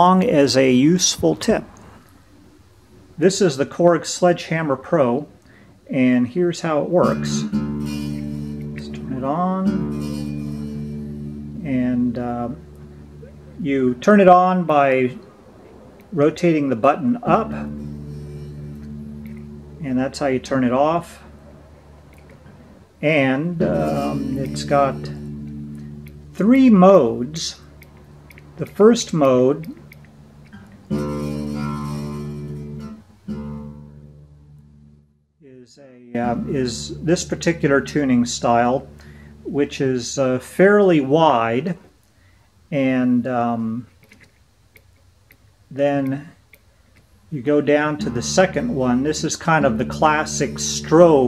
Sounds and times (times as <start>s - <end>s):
Speech: 0.0s - 1.8s, 3.2s - 5.3s, 5.9s - 7.6s, 8.8s - 9.8s, 11.6s - 12.6s, 13.5s - 15.2s, 16.1s - 17.7s, 19.8s - 21.3s, 23.0s - 25.2s, 26.4s - 27.6s, 28.6s - 29.8s, 35.4s - 38.9s, 39.5s - 41.9s, 42.7s - 43.9s, 45.7s - 46.4s, 47.3s - 51.2s
Guitar: 0.0s - 35.3s, 36.0s - 51.2s
Electronic tuner: 6.8s - 35.2s, 36.2s - 40.4s, 47.7s - 51.2s.